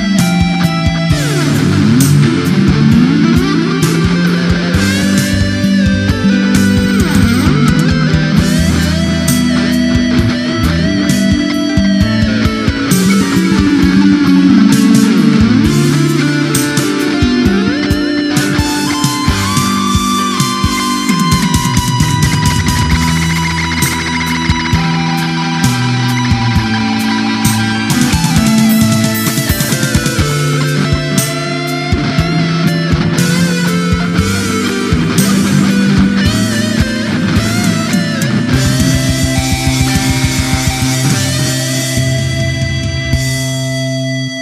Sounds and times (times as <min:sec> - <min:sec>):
Electric guitar: 0:00.0 - 0:44.4
Heavy metal: 0:00.0 - 0:44.4
Progressive rock: 0:00.0 - 0:44.4.